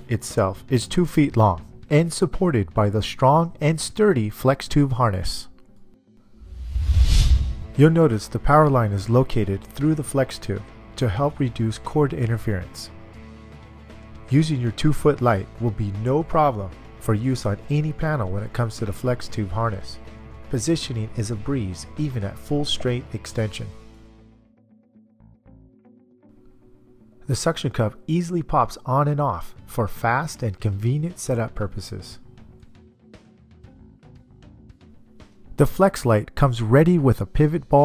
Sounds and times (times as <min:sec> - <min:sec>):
Speech: 0:00.0 - 0:05.5, 0:07.8 - 0:12.9, 0:14.3 - 0:23.8, 0:27.3 - 0:32.2, 0:35.6 - 0:37.8
Music: 0:00.0 - 0:37.8.